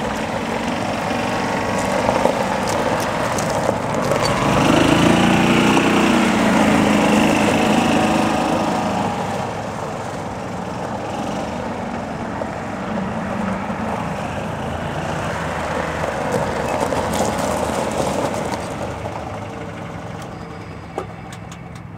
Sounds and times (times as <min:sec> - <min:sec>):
Car: 0:00.0 - 0:21.9.